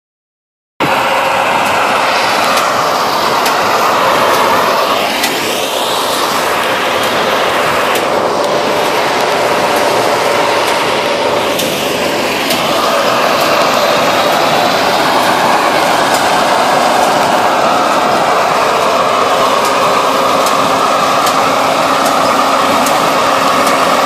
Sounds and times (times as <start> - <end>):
Outside, rural or natural: 0.8 - 24.0
Vehicle: 0.8 - 24.0.